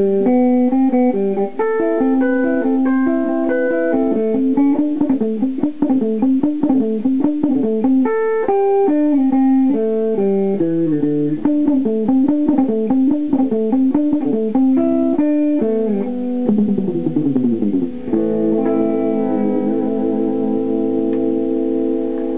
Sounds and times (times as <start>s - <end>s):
Bass guitar: 0.0s - 22.3s
Electric guitar: 0.0s - 22.3s
Strum: 0.0s - 22.3s.